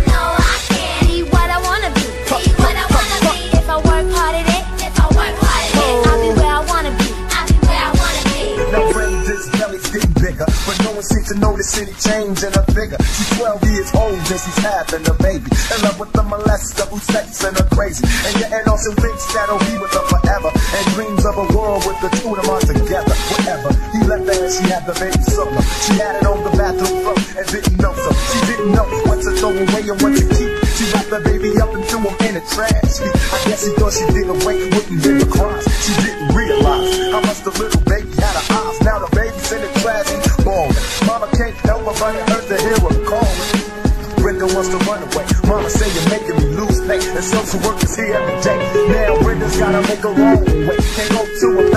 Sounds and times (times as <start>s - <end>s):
Music: 0.0s - 51.7s
Rapping: 0.0s - 51.7s.